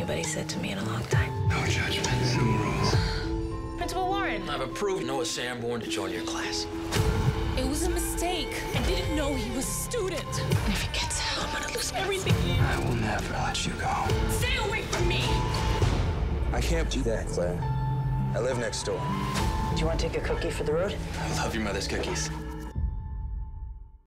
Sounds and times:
Music: 0.0s - 24.1s.

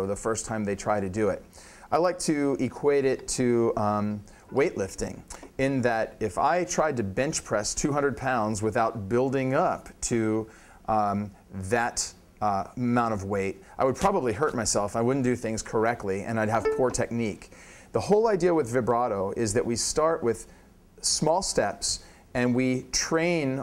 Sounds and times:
Speech: 0.0s - 23.6s.

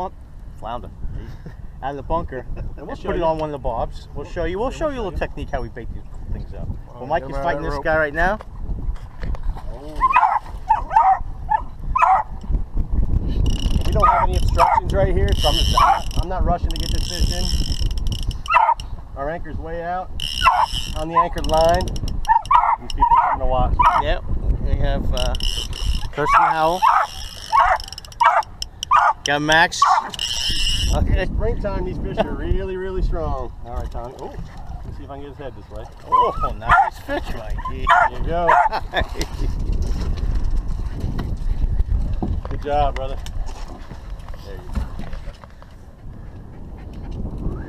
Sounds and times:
Outside, rural or natural: 0.0s - 47.6s.

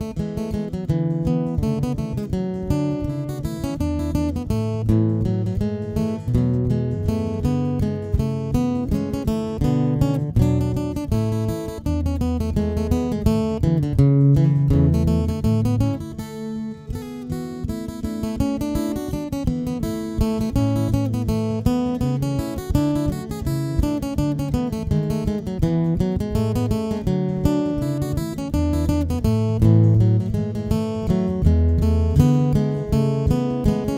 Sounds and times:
Acoustic guitar: 0.0s - 33.9s.

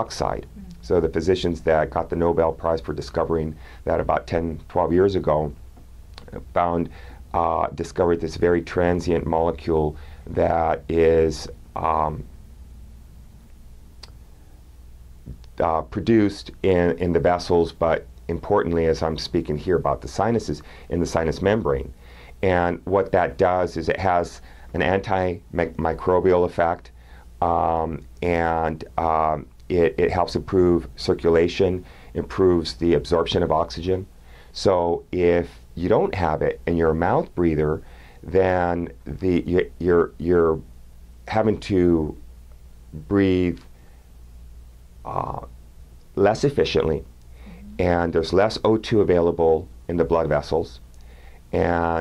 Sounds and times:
Speech: 0.0s - 5.6s, 6.2s - 12.3s, 15.3s - 40.7s, 41.3s - 42.2s, 43.0s - 43.7s, 45.1s - 45.5s, 46.2s - 50.8s, 51.5s - 52.0s.

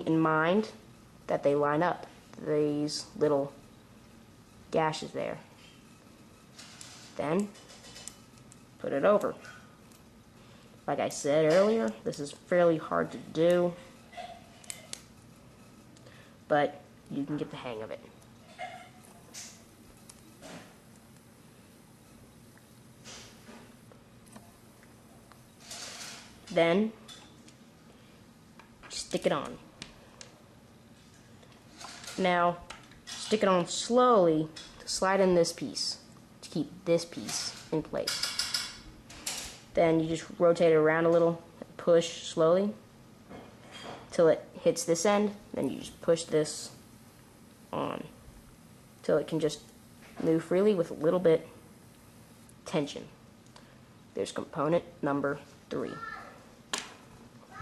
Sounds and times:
Speech: 0.0s - 3.6s, 4.7s - 5.5s, 7.2s - 7.6s, 8.8s - 9.4s, 10.9s - 13.8s, 16.5s - 18.1s, 26.5s - 27.0s, 28.9s - 29.6s, 32.2s - 32.6s, 33.2s - 38.2s, 39.8s - 42.8s, 44.1s - 46.8s, 47.8s - 48.2s, 49.0s - 49.6s, 50.2s - 51.6s, 52.7s - 53.2s, 54.2s - 56.3s.

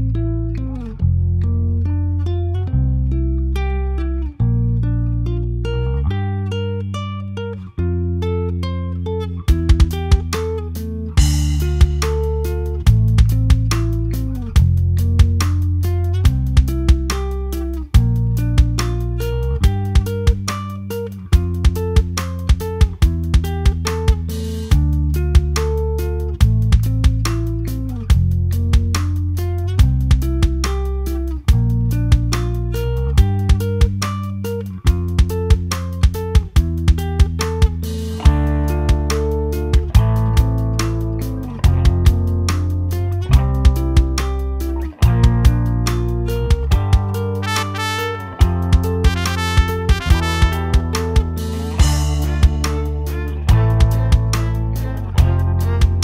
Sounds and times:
Music: 0.0s - 56.0s.

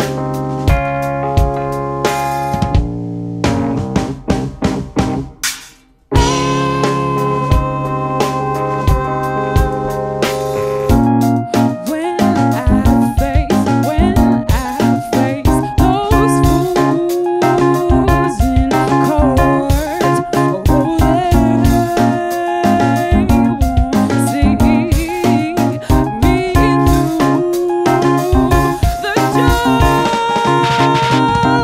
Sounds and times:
Music: 0.0s - 31.6s
Singing: 6.8s - 10.1s, 26.2s - 31.6s.

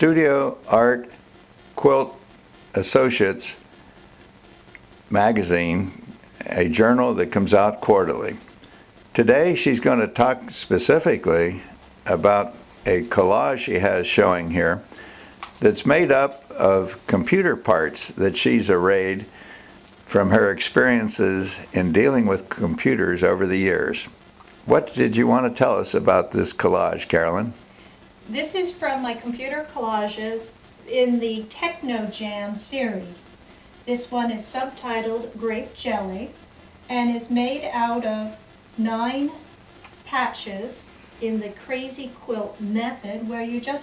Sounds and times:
Speech: 2.8s - 3.6s, 5.1s - 8.4s, 9.2s - 14.8s, 15.6s - 19.3s, 20.1s - 24.1s, 24.7s - 27.6s, 28.3s - 33.3s, 33.9s - 39.4s, 40.1s - 43.8s.

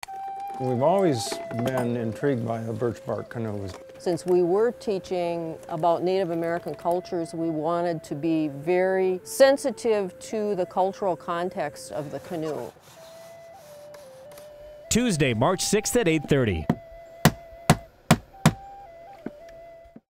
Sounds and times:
Music: 0.0s - 20.0s
Speech: 14.9s - 16.7s.

